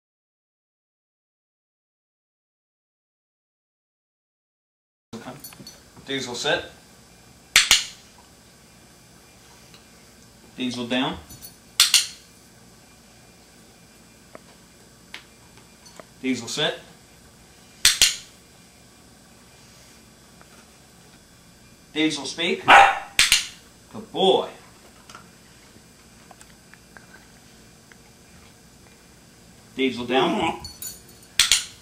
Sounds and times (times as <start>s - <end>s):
Speech: 5.2s - 6.8s, 10.6s - 11.3s, 16.2s - 17.0s, 21.9s - 22.7s, 23.9s - 24.7s, 29.8s - 30.6s
Dog: 22.7s - 23.2s.